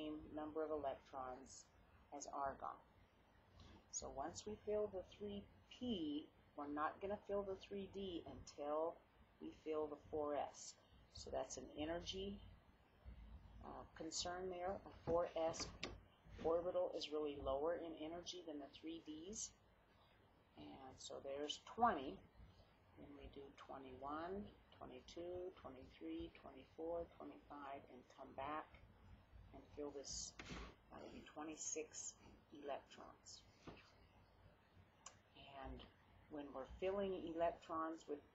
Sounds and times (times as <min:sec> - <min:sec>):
Speech: 0:00.0 - 0:02.9, 0:03.9 - 0:12.5, 0:13.6 - 0:19.6, 0:20.6 - 0:22.2, 0:23.0 - 0:28.8, 0:29.6 - 0:30.4, 0:31.0 - 0:33.5, 0:35.4 - 0:38.3.